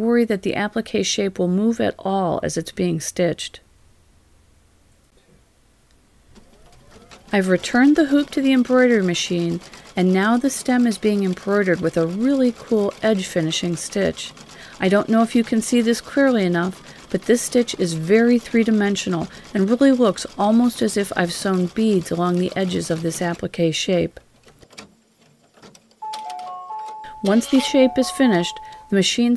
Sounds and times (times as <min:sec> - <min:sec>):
Speech: 0:00.0 - 0:03.6, 0:07.3 - 0:24.2, 0:27.2 - 0:29.3
Sewing machine: 0:06.4 - 0:23.5.